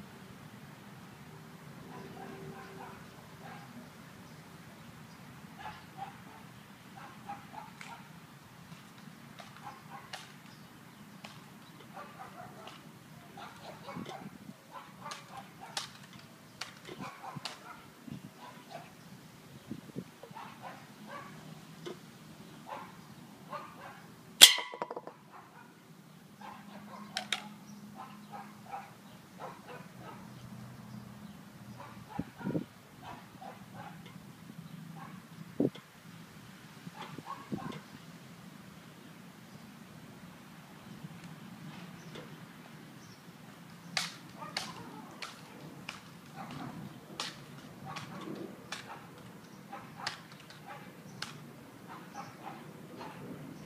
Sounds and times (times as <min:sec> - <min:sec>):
Outside, rural or natural: 0:00.0 - 0:53.6
Yip: 0:05.6 - 0:06.4, 0:07.0 - 0:08.1, 0:09.6 - 0:10.2, 0:22.7 - 0:25.7, 0:26.4 - 0:30.2, 0:37.0 - 0:37.8, 0:49.7 - 0:50.9, 0:51.9 - 0:53.2.